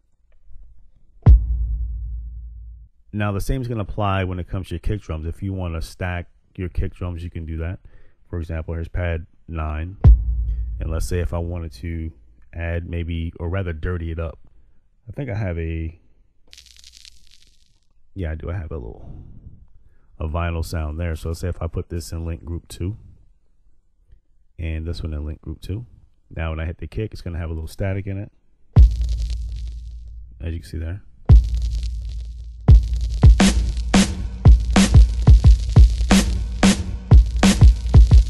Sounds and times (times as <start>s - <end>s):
Speech: 3.1s - 10.0s, 10.8s - 14.4s, 15.1s - 16.0s, 18.2s - 19.6s, 20.2s - 23.2s, 24.6s - 28.4s, 30.4s - 31.1s.